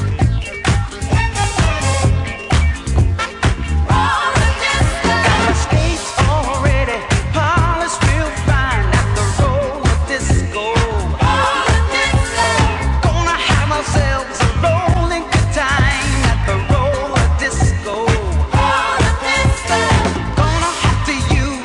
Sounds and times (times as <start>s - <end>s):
Disco: 0.0s - 21.6s.